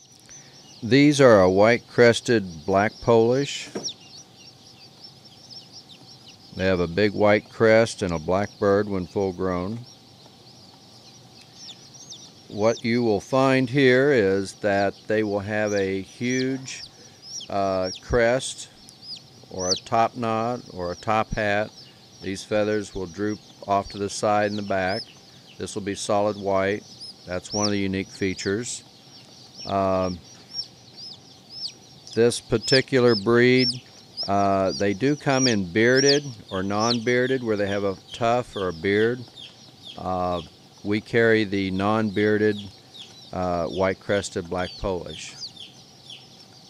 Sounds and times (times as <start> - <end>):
Speech: 0.8 - 3.8, 6.6 - 9.8, 12.5 - 16.9, 17.5 - 18.7, 19.5 - 25.0, 25.6 - 28.8, 29.7 - 30.2, 32.1 - 39.3, 40.0 - 42.7, 43.4 - 45.4.